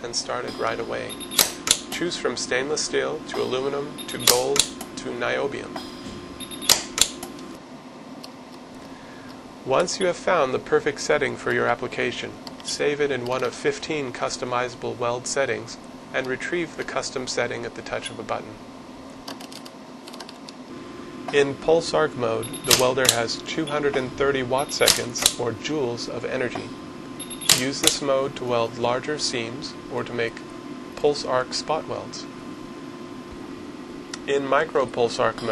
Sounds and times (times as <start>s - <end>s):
Speech: 0.0s - 1.2s, 1.9s - 5.8s, 9.6s - 18.6s, 21.3s - 26.8s, 27.5s - 30.4s, 31.0s - 32.3s, 34.2s - 35.5s.